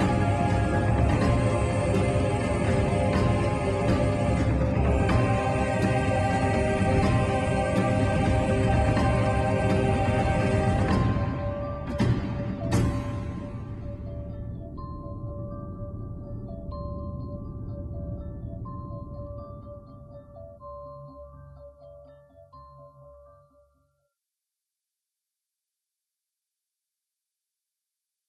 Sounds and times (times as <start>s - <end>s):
Music: 0.0s - 24.2s.